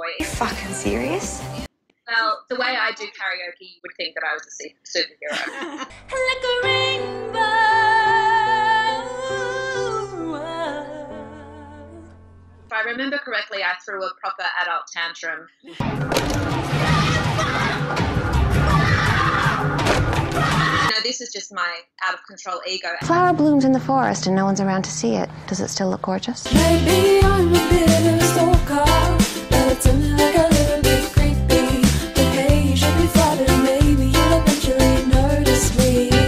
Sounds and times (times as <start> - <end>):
Speech: 0.0 - 1.4, 2.1 - 5.4, 12.7 - 15.5, 20.9 - 26.5
Music: 0.0 - 1.7, 6.0 - 12.7, 15.7 - 20.9, 23.0 - 25.3, 26.4 - 36.2.